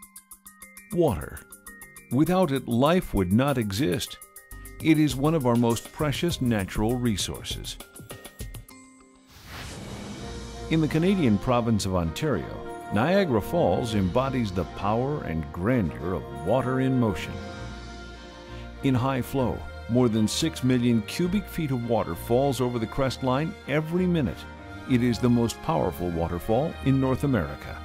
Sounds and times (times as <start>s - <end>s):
Music: 0.0s - 27.8s
Speech: 1.0s - 1.4s, 2.1s - 4.2s, 4.8s - 7.8s, 10.7s - 17.4s, 18.8s - 27.8s.